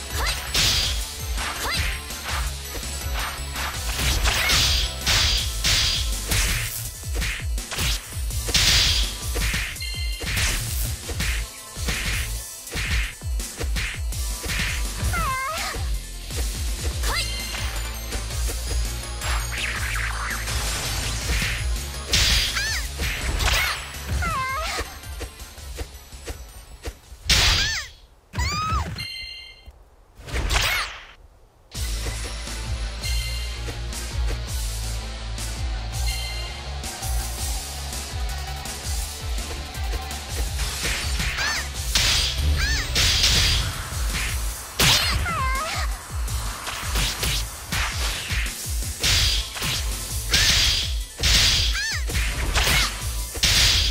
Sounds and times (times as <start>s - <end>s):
Music: 0.0s - 27.8s, 31.7s - 53.9s.